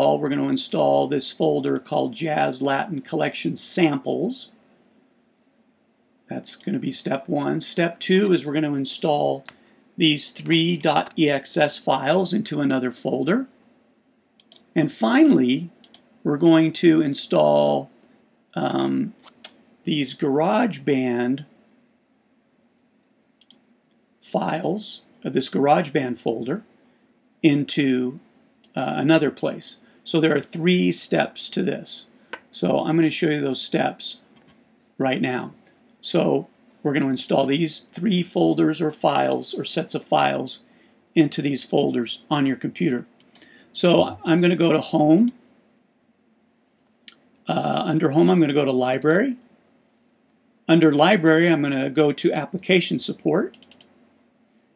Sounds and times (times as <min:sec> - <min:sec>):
Speech: 0:00.0 - 0:04.6, 0:06.3 - 0:13.5, 0:14.6 - 0:18.0, 0:18.6 - 0:19.3, 0:19.9 - 0:21.5, 0:24.2 - 0:26.7, 0:27.4 - 0:34.3, 0:35.0 - 0:43.1, 0:43.8 - 0:45.4, 0:47.5 - 0:49.4, 0:50.7 - 0:53.6.